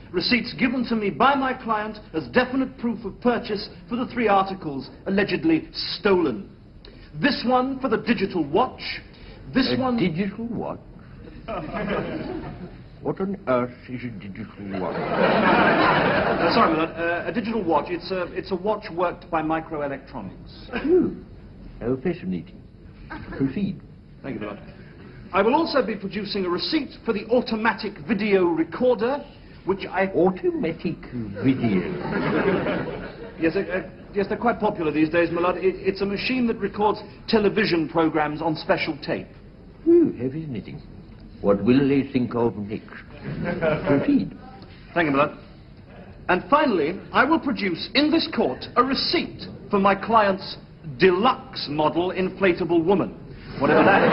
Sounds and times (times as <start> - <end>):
Speech: 0.1 - 6.5, 7.2 - 10.9, 13.0 - 15.0, 16.4 - 21.2, 25.3 - 32.0, 33.4 - 39.3, 46.3 - 54.1.